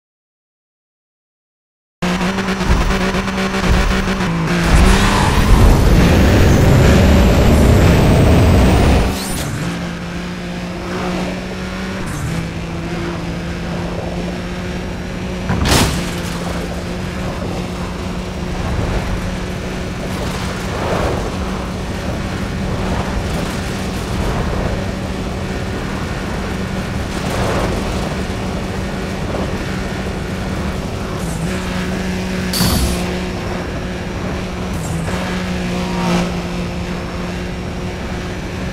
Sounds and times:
Skidding: 2.0s - 38.7s.

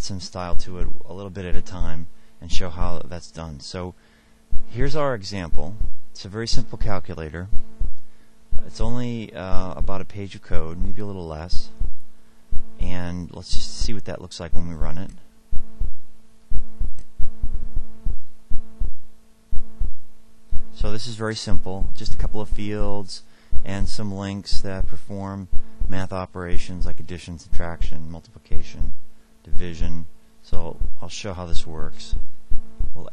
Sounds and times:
Speech: 0.0s - 4.0s, 4.7s - 7.5s, 8.6s - 11.8s, 12.8s - 15.3s, 20.8s - 28.9s, 29.5s - 32.2s.

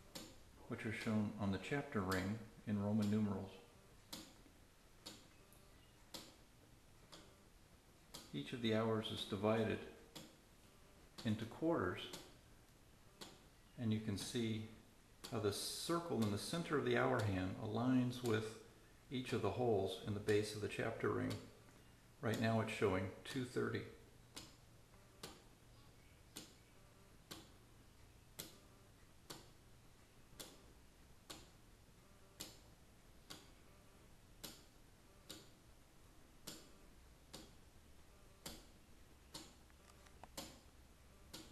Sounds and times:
Tick-tock: 0.0s - 3.4s, 4.0s - 5.4s, 6.0s - 6.4s, 7.0s - 7.4s, 8.1s - 8.3s, 10.1s - 10.4s, 11.2s - 12.4s, 13.2s - 13.5s, 14.1s - 14.4s, 15.2s - 18.6s, 20.2s - 21.6s, 22.3s - 25.5s, 26.3s - 26.6s, 27.2s - 29.6s, 30.3s - 31.6s, 32.3s - 33.6s, 34.4s - 35.7s, 36.4s - 37.7s, 38.4s - 40.7s, 41.3s - 41.5s
Speech: 0.6s - 3.7s, 8.3s - 10.0s, 11.2s - 12.2s, 13.8s - 21.5s, 22.2s - 24.0s.

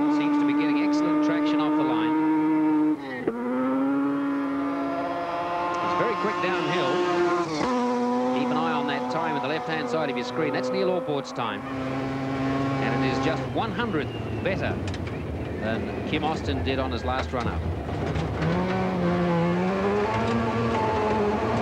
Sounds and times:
Speech: 5.8s - 7.6s, 8.4s - 11.6s, 12.8s - 14.8s, 15.6s - 17.6s.

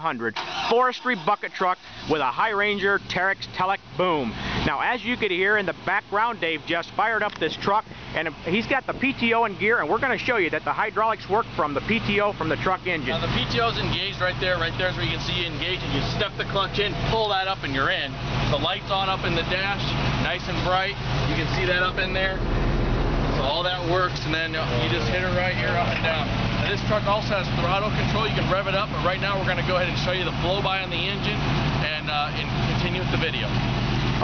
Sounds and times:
Speech: 0.0s - 22.4s, 23.4s - 33.6s
Truck: 0.0s - 34.2s.

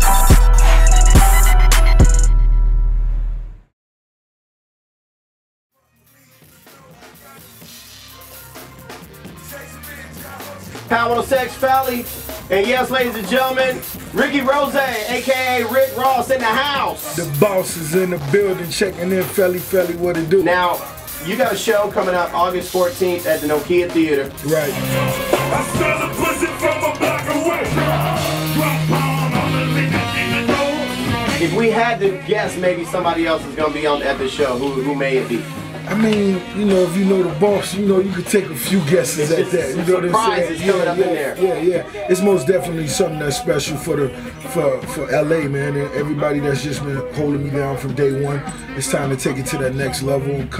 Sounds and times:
Music: 0.0s - 3.8s, 5.7s - 50.5s
Speech: 10.9s - 24.8s, 31.4s - 50.5s.

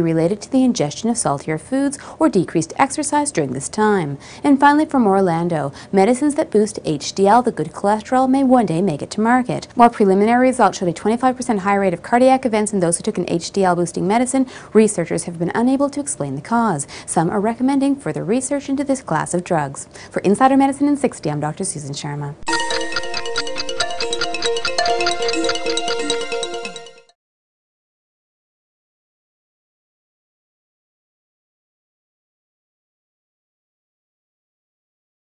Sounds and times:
Speech: 0.0s - 22.4s
Music: 22.4s - 27.2s.

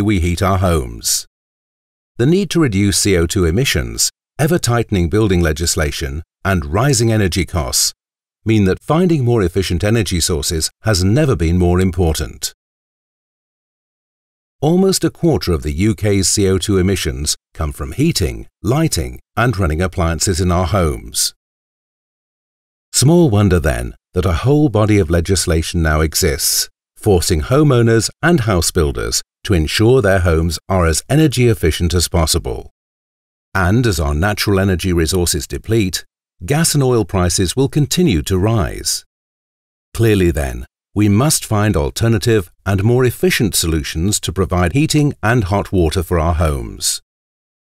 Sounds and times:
Speech: 0.0s - 1.3s, 2.2s - 12.6s, 14.6s - 21.4s, 23.0s - 32.7s, 33.6s - 39.1s, 40.0s - 47.1s.

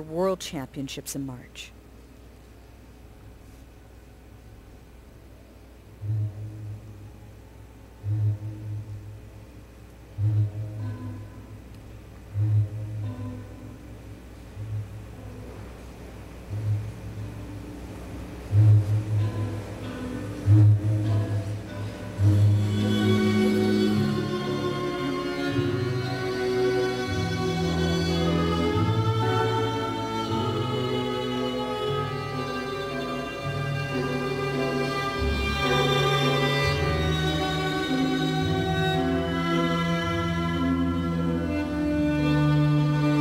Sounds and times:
Music: 0.0s - 43.2s
Inside, large room or hall: 1.6s - 43.2s.

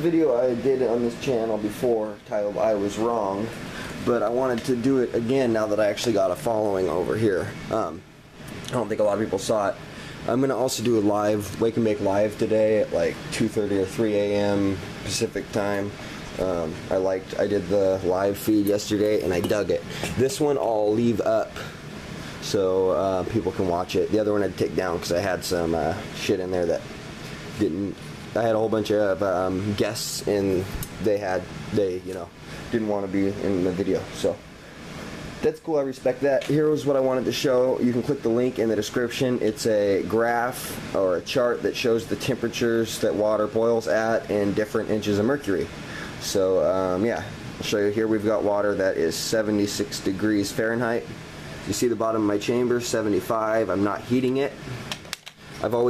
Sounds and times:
Speech: 0.0s - 21.8s, 22.4s - 26.9s, 27.6s - 34.4s, 35.4s - 54.7s, 55.6s - 55.8s
Boiling: 0.0s - 55.8s.

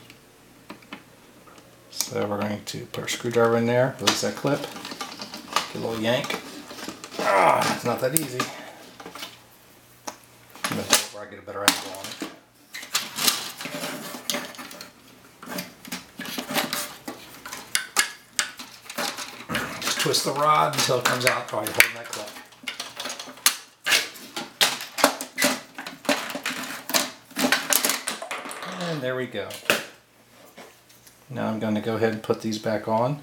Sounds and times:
Speech: 2.0s - 4.7s, 5.7s - 6.4s, 7.2s - 8.6s, 10.7s - 12.2s, 19.8s - 22.4s, 28.7s - 29.7s, 31.3s - 33.2s.

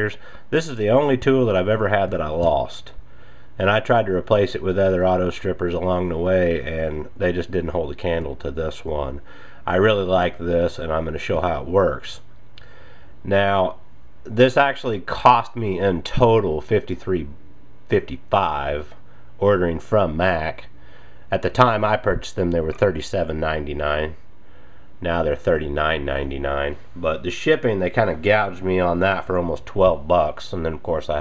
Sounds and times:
Speech: 0.0s - 3.0s, 3.6s - 12.3s, 13.2s - 24.2s, 25.0s - 31.2s.

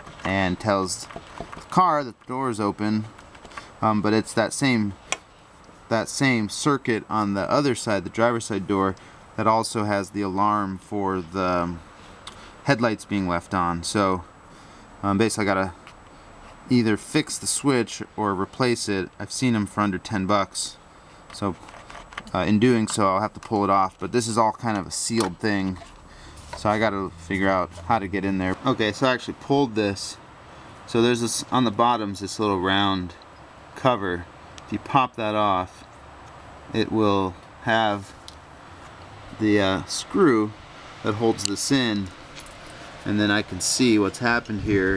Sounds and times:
Speech: 0.2s - 1.1s, 1.7s - 3.1s, 3.8s - 5.0s, 5.9s - 11.8s, 12.6s - 14.3s, 15.0s - 15.8s, 16.7s - 20.8s, 21.4s - 21.6s, 22.3s - 25.9s, 26.6s - 30.2s, 30.9s - 33.2s, 33.8s - 35.8s, 36.7s - 38.2s, 39.4s - 42.2s, 43.0s - 44.9s.

